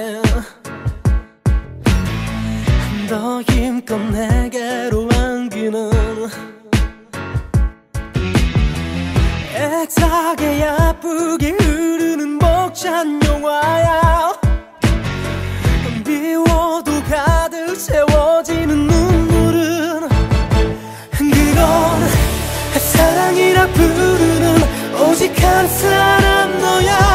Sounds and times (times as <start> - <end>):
Music: 0.0 - 27.1.